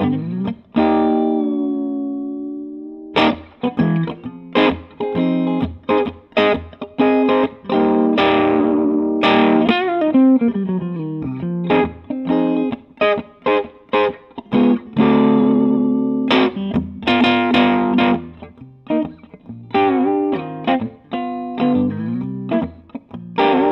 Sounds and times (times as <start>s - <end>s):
Electric guitar: 0.0s - 23.7s.